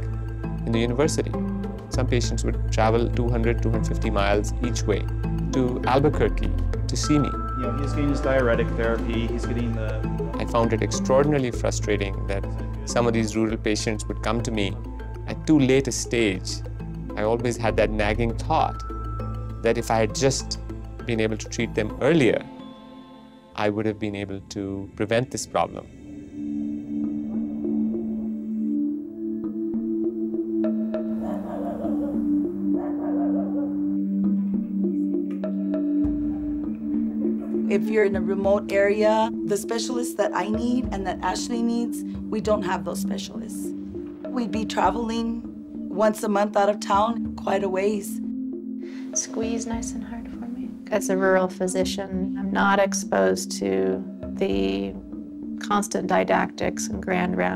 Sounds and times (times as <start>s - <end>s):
Music: 0.0s - 57.5s.